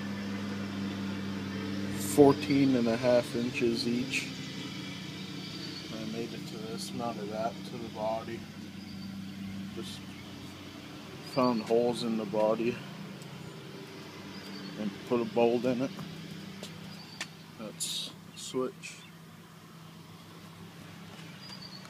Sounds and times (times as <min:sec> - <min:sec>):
Outside, rural or natural: 0:00.0 - 0:21.8
Speech: 0:02.0 - 0:04.3, 0:05.9 - 0:08.4, 0:09.8 - 0:10.0, 0:11.3 - 0:12.8, 0:14.8 - 0:15.9, 0:17.6 - 0:19.1.